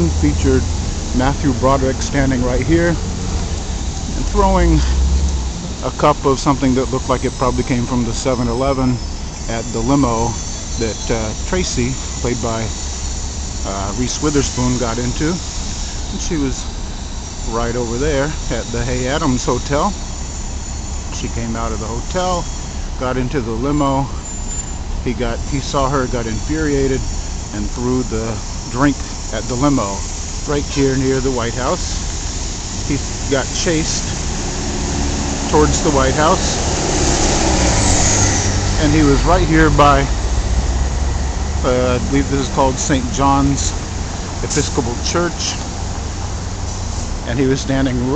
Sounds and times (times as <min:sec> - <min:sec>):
Speech: 0:00.0 - 0:03.0, 0:04.1 - 0:05.0, 0:05.8 - 0:12.8, 0:13.6 - 0:15.4, 0:16.1 - 0:16.7, 0:17.5 - 0:20.0, 0:21.1 - 0:24.2, 0:25.0 - 0:32.0, 0:32.8 - 0:34.2, 0:35.5 - 0:36.6, 0:38.8 - 0:40.2, 0:41.6 - 0:43.8, 0:44.4 - 0:45.6, 0:47.2 - 0:48.1
Car: 0:00.0 - 0:48.1
Outside, urban or manmade: 0:00.0 - 0:48.1.